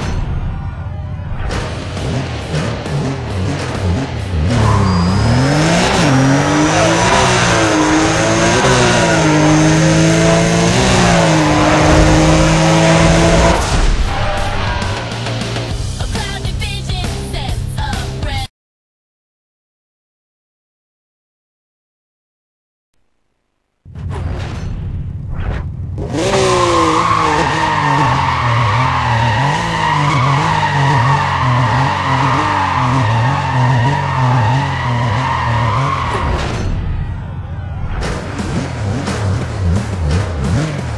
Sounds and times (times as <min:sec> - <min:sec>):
Car: 0:00.0 - 0:18.4, 0:23.4 - 0:40.9
Music: 0:14.1 - 0:18.5.